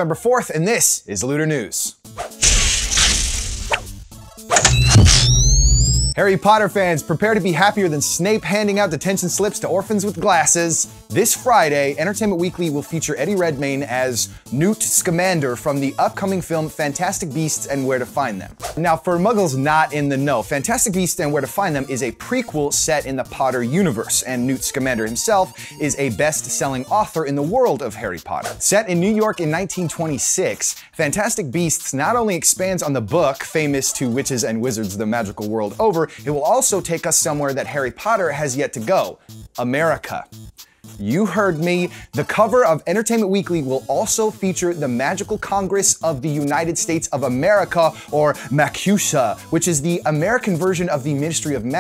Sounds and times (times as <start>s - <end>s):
Speech: 0.0s - 2.0s, 6.2s - 40.3s, 41.0s - 51.8s
Music: 0.0s - 51.8s.